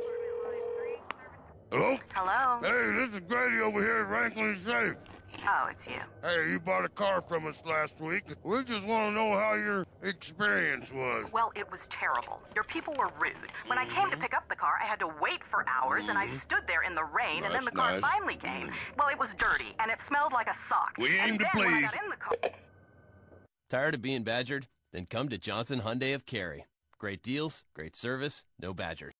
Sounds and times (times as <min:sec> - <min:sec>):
Speech: 0:01.8 - 0:05.6, 0:06.3 - 0:11.3, 0:13.0 - 0:18.7, 0:19.3 - 0:22.3, 0:23.7 - 0:29.1.